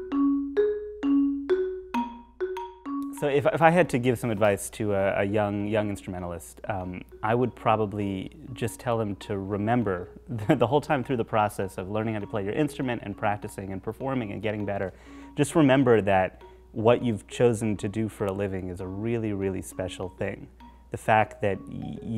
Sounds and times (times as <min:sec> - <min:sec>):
Glockenspiel: 0:00.0 - 0:04.3, 0:05.1 - 0:22.1
Marimba, xylophone: 0:00.0 - 0:04.5, 0:05.7 - 0:22.1.